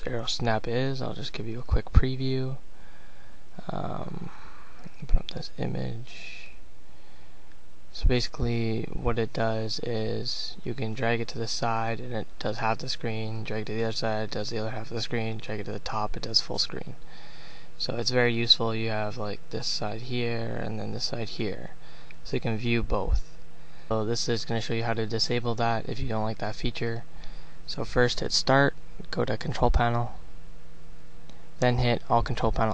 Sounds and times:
Speech: 0.0s - 2.6s, 3.6s - 6.6s, 8.0s - 17.0s, 17.8s - 23.3s, 23.9s - 27.1s, 27.7s - 30.2s, 31.6s - 32.7s.

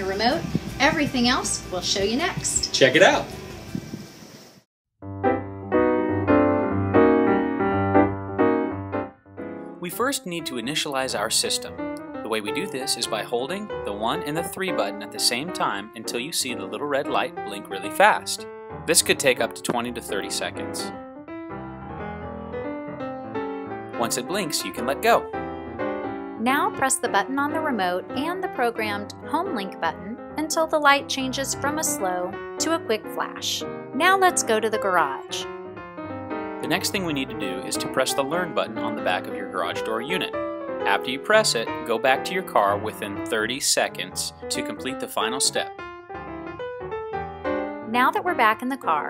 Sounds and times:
Speech: 0.0s - 3.3s, 9.8s - 11.7s, 12.3s - 20.9s, 24.0s - 25.2s, 26.4s - 35.5s, 36.6s - 40.3s, 40.9s - 45.7s, 47.9s - 49.1s
Music: 0.0s - 4.1s, 5.0s - 49.1s.

